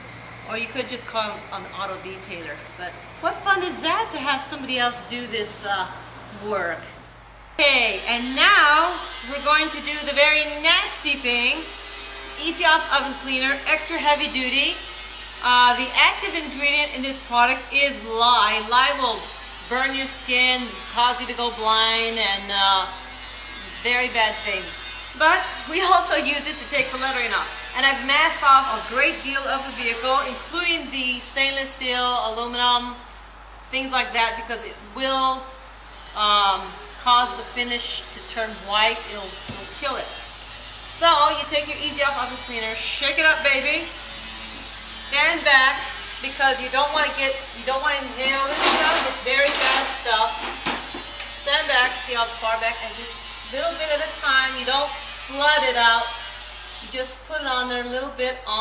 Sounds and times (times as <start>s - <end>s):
Speech: 0.5s - 7.0s, 7.6s - 11.7s, 12.4s - 14.8s, 15.4s - 23.0s, 23.8s - 33.0s, 33.8s - 35.5s, 36.2s - 40.2s, 41.0s - 43.9s, 45.1s - 50.4s, 51.4s - 56.2s, 56.8s - 58.6s
Electric shaver, electric razor: 7.6s - 32.1s, 35.1s - 58.6s.